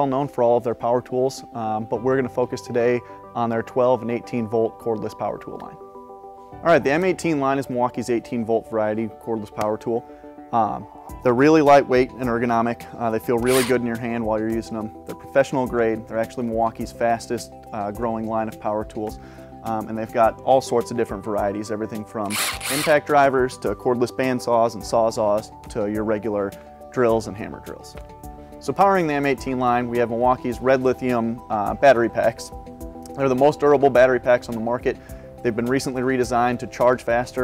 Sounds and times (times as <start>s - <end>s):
Speech: 0.0s - 5.8s, 6.6s - 28.0s, 28.6s - 32.5s, 33.1s - 37.4s
Music: 0.0s - 37.4s.